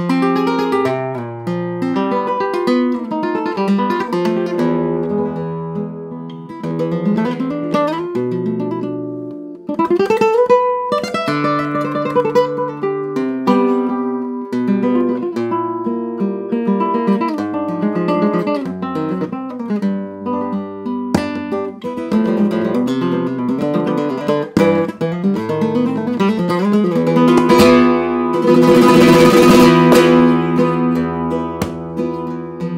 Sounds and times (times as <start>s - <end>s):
Acoustic guitar: 0.0s - 32.7s
Flamenco: 0.0s - 32.7s
Strum: 0.0s - 32.7s.